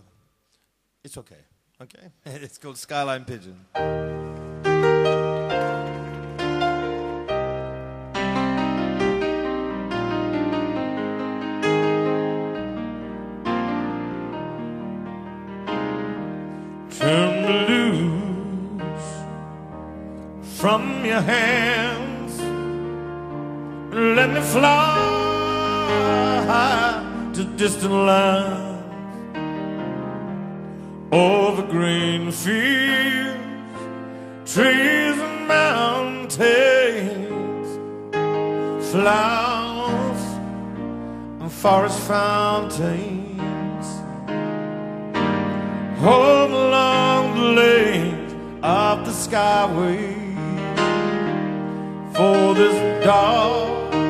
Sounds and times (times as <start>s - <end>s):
Music: 3.3s - 54.0s.